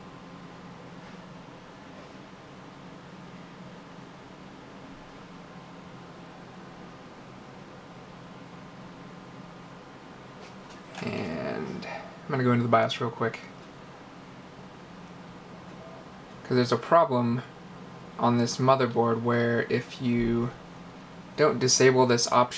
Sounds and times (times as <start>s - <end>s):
Speech: 11.0s - 13.6s, 16.4s - 17.5s, 18.2s - 20.6s, 21.4s - 22.5s.